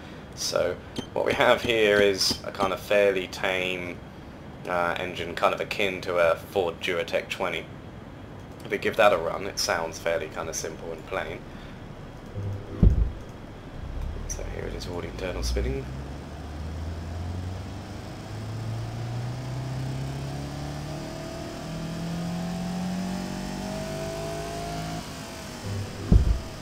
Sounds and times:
Speech: 0:00.4 - 0:04.0, 0:04.6 - 0:07.7, 0:08.6 - 0:11.5, 0:14.2 - 0:15.9
Vehicle: 0:09.0 - 0:26.6
Accelerating, revving, vroom: 0:15.5 - 0:26.6.

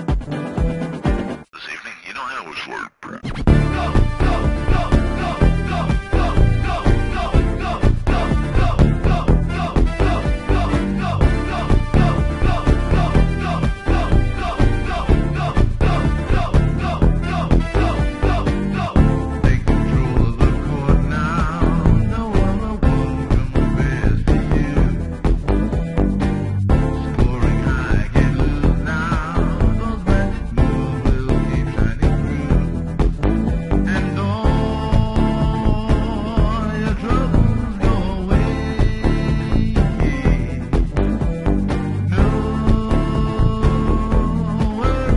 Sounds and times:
Video game music: 0:03.4 - 0:45.1.

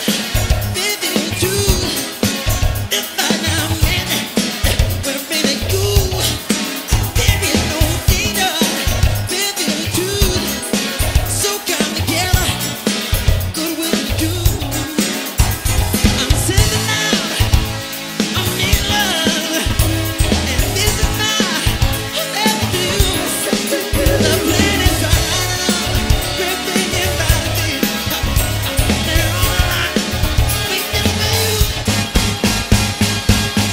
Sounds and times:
Music: 0:00.0 - 0:33.7
Singing: 0:18.4 - 0:28.2, 0:28.8 - 0:31.8.

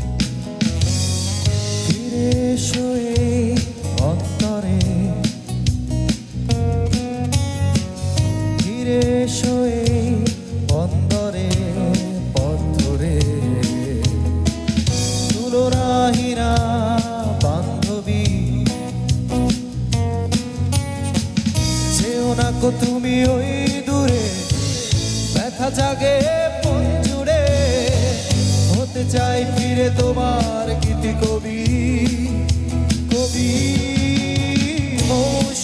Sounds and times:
Rhythm and blues: 0:00.0 - 0:35.6.

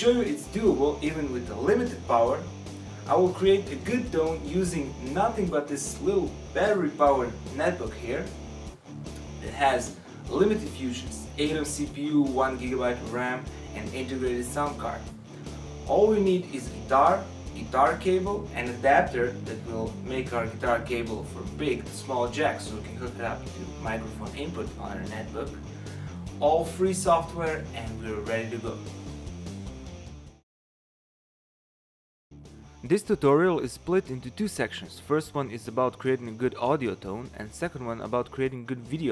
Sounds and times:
Speech: 0:00.0 - 0:02.5, 0:03.1 - 0:08.4, 0:09.4 - 0:15.1, 0:15.9 - 0:25.6, 0:26.4 - 0:28.9, 0:32.8 - 0:39.1
Music: 0:00.0 - 0:30.4, 0:32.3 - 0:39.1.

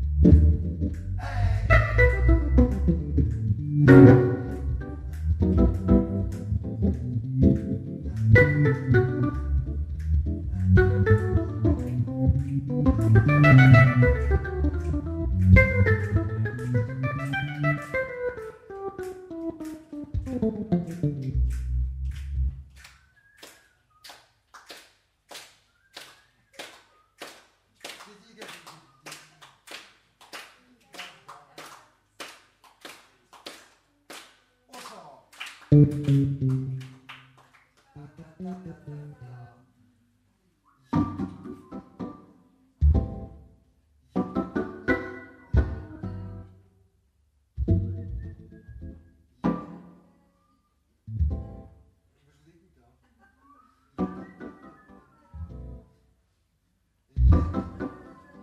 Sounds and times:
Electronic organ: 0:00.0 - 0:21.4, 0:41.0 - 0:43.4, 0:44.2 - 0:46.4, 0:47.6 - 0:49.9, 0:53.9 - 0:55.9, 0:57.2 - 0:58.4.

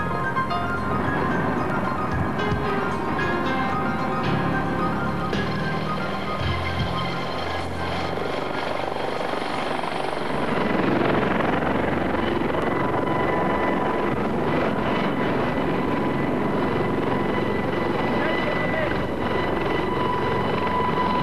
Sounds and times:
Helicopter: 0:00.0 - 0:21.2.

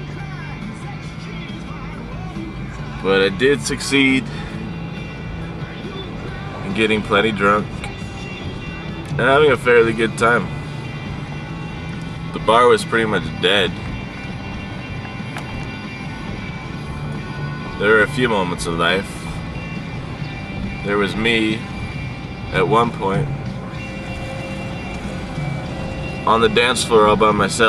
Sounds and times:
Music: 0:00.0 - 0:27.6
Speech: 0:03.0 - 0:04.2, 0:06.7 - 0:07.7, 0:09.2 - 0:10.5, 0:12.4 - 0:13.7, 0:17.8 - 0:19.1, 0:20.9 - 0:21.6, 0:22.5 - 0:23.3, 0:26.3 - 0:27.6.

